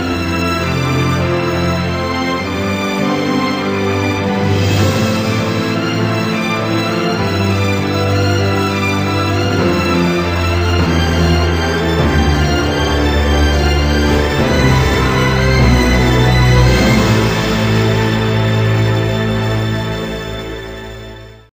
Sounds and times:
Music: 0.0 - 21.5.

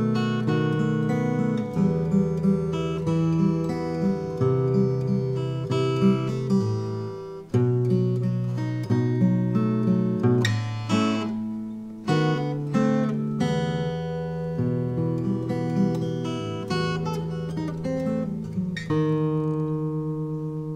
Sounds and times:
Acoustic guitar: 0.0 - 20.7
Strum: 0.0 - 20.7.

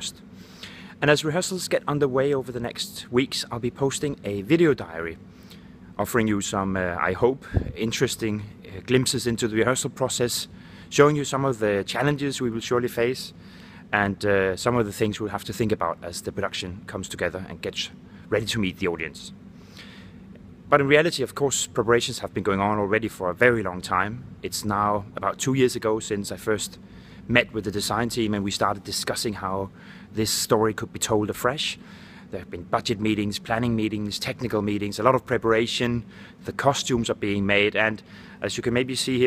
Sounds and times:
Speech: 0.0 - 0.2, 1.0 - 5.2, 6.0 - 19.4, 20.7 - 39.2.

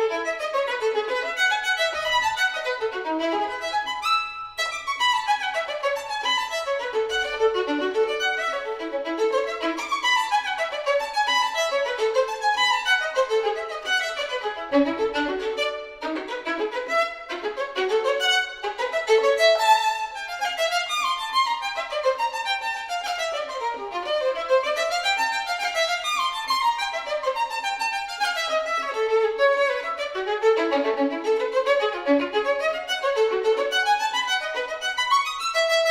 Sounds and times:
Violin, fiddle: 0.0 - 35.9.

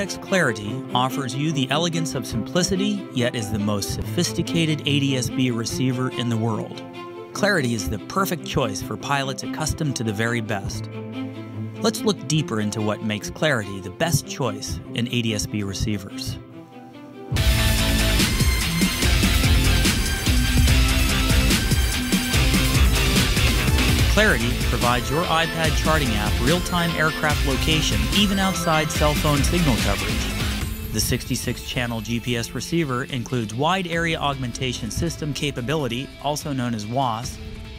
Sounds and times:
Speech: 0.0 - 6.8, 7.4 - 10.9, 11.8 - 16.4, 24.1 - 30.3, 30.9 - 37.4
Music: 0.0 - 37.7.

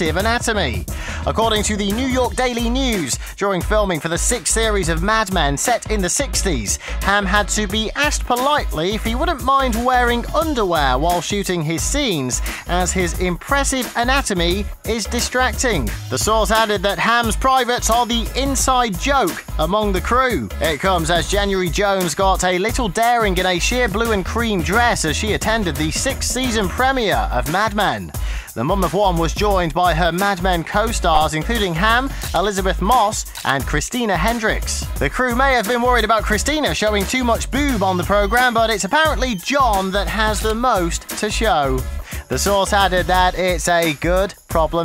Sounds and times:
Music: 0.0 - 44.8
Speech: 0.0 - 44.8.

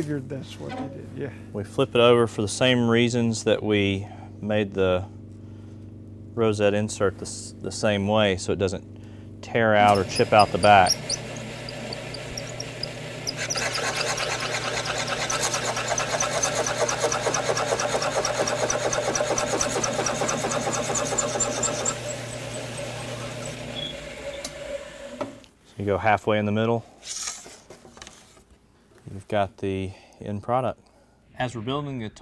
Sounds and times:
Speech: 0.0 - 5.1, 6.4 - 8.8, 9.4 - 10.9, 25.8 - 26.9, 29.1 - 30.8, 31.4 - 32.2
Tools: 9.9 - 22.1.

